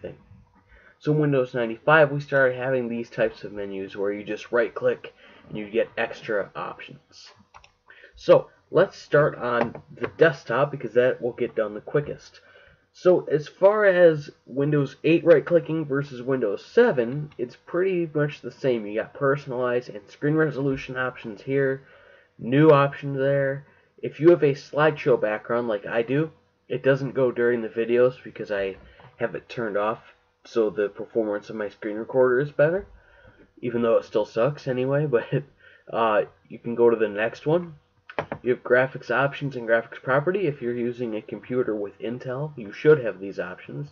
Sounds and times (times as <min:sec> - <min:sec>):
Speech: 0:00.0 - 0:00.3, 0:01.0 - 0:07.4, 0:08.1 - 0:32.9, 0:33.6 - 0:43.9.